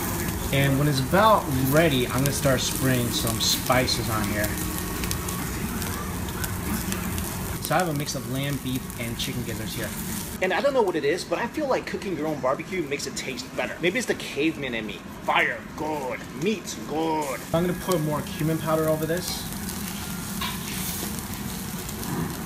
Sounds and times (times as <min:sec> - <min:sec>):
Speech: 0:00.5 - 0:04.6, 0:07.6 - 0:19.5.